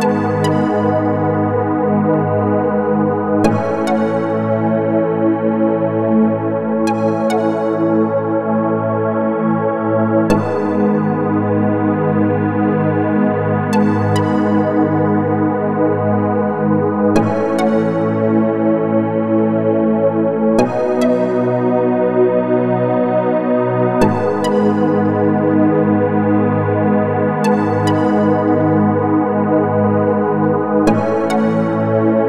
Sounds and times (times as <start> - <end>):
Electronic music: 0.0 - 1.6, 3.4 - 4.6, 10.3 - 11.6, 20.6 - 22.0, 24.0 - 25.4, 30.9 - 32.2.